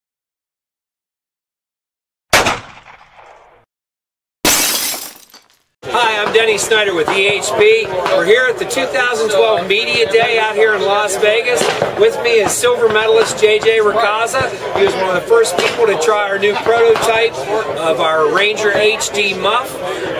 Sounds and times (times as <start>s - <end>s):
Speech: 5.8s - 20.1s.